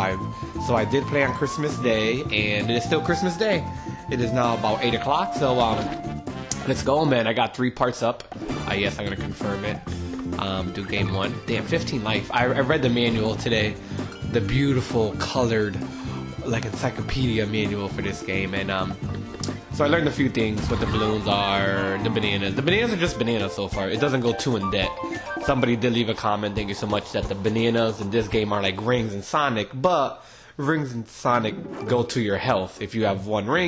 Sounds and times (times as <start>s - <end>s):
Speech: 0.0s - 6.0s, 6.6s - 9.8s, 10.4s - 19.0s, 19.7s - 33.6s
Music: 0.0s - 7.5s, 8.3s - 29.5s, 31.3s - 33.6s.